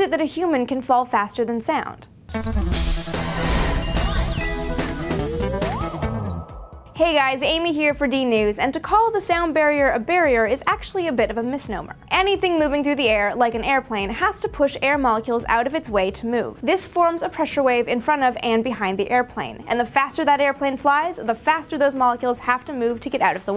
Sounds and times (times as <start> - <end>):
Speech: 0.0 - 2.1, 7.0 - 23.5.